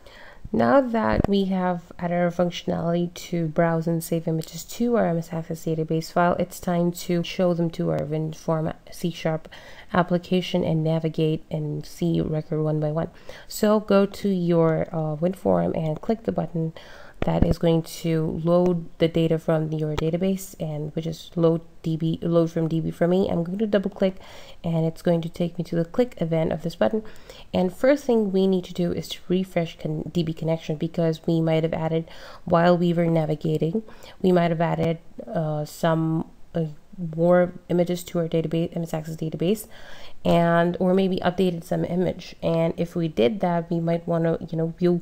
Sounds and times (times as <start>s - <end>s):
Speech: 0.5s - 45.0s.